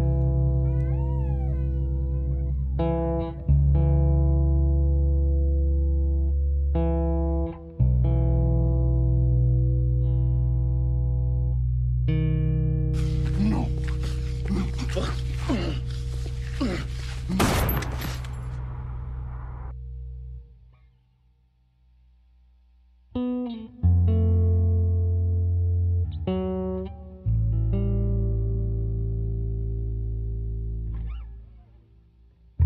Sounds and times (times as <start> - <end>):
Effects unit: 0.0 - 13.3, 19.6 - 32.6
Music: 0.0 - 18.3, 23.0 - 32.6.